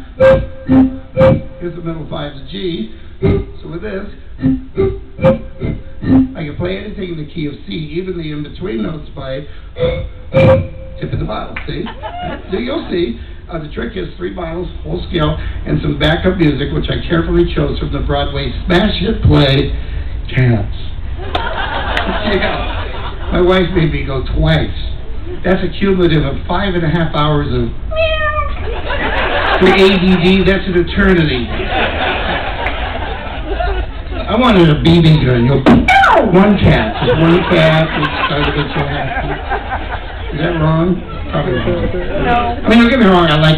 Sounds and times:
Speech: 0:06.4 - 0:09.5, 0:11.0 - 0:19.7, 0:23.3 - 0:27.8, 0:29.6 - 0:31.5, 0:34.3 - 0:35.7, 0:36.3 - 0:39.2, 0:40.3 - 0:43.5.

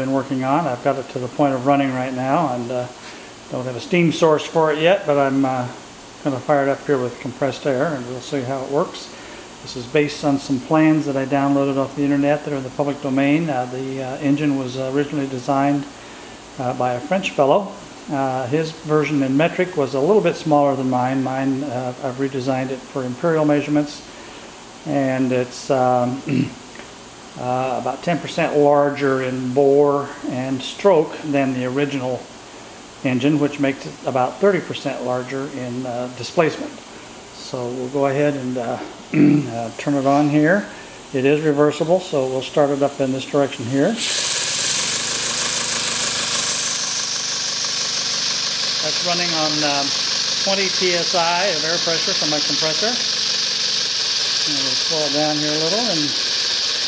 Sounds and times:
Speech: 0:00.0 - 0:16.0, 0:16.6 - 0:24.1, 0:24.8 - 0:26.6, 0:27.4 - 0:32.3, 0:33.0 - 0:36.8, 0:37.4 - 0:44.0, 0:48.8 - 0:53.1, 0:54.4 - 0:56.2.

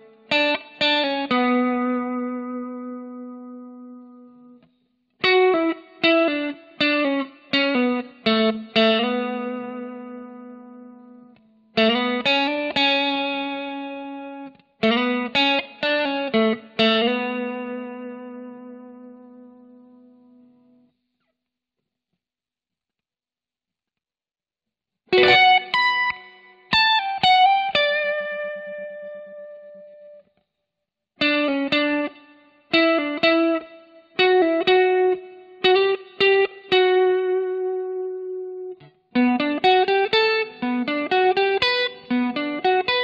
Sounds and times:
Inside, small room: 0:00.0 - 0:43.0.

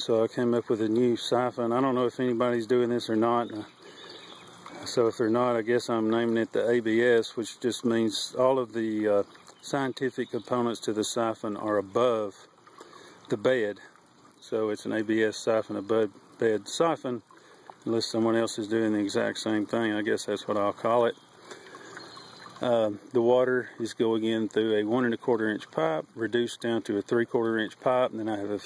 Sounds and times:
Speech: 0:00.0 - 0:03.7, 0:04.7 - 0:12.5, 0:13.3 - 0:17.2, 0:17.9 - 0:21.2, 0:22.6 - 0:28.6.

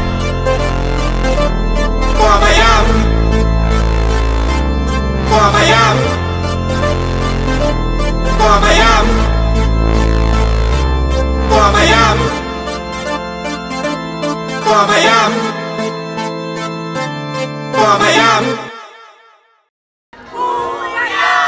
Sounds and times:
Music: 0:00.0 - 0:19.7.

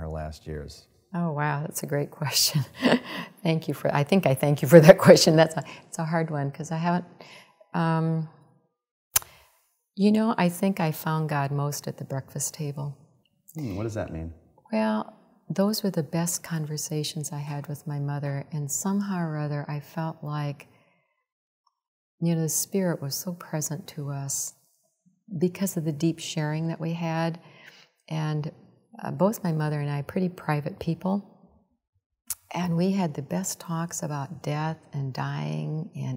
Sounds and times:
Speech: 0:00.0 - 0:02.7, 0:13.6 - 0:20.6, 0:25.4 - 0:27.4, 0:28.1 - 0:31.2, 0:32.4 - 0:36.1.

